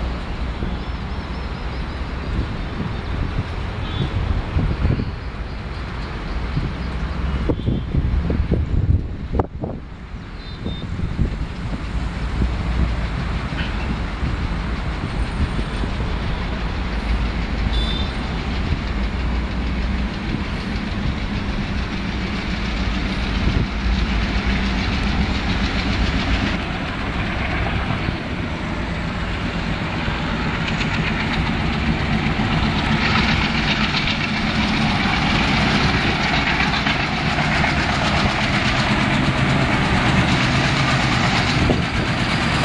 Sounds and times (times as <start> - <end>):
Railroad car, train wagon: 0.0 - 42.6
Train: 0.0 - 42.6.